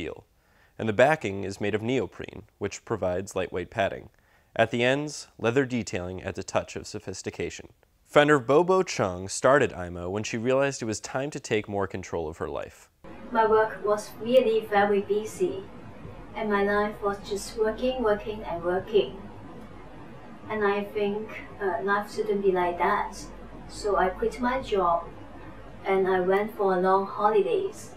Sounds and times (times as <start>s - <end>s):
Speech: 0.0s - 15.6s, 20.5s - 25.1s.